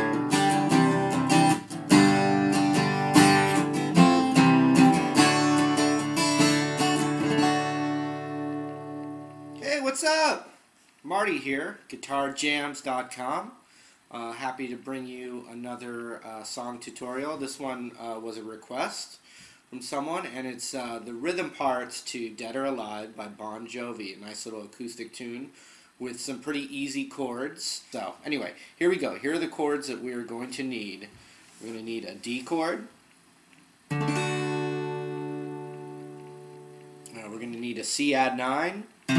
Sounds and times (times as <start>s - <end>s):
Speech: 9.6s - 33.0s, 37.1s - 38.9s.